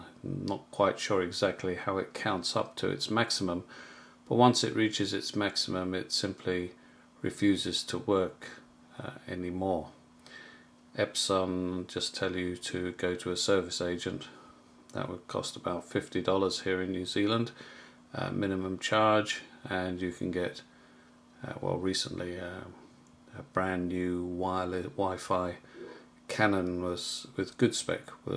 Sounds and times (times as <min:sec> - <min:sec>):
Speech: 0:00.0 - 0:03.7, 0:04.3 - 0:10.0, 0:11.0 - 0:20.7, 0:21.4 - 0:25.7, 0:26.3 - 0:28.3.